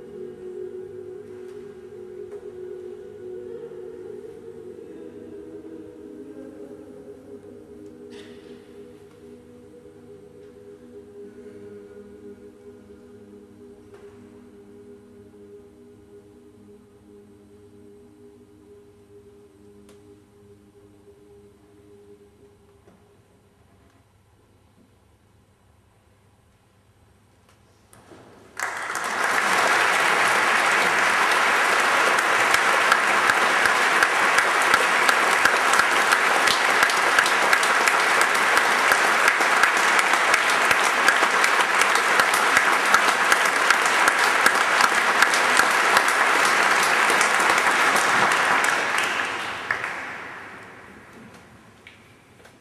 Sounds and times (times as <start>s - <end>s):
Applause: 28.5s - 51.2s.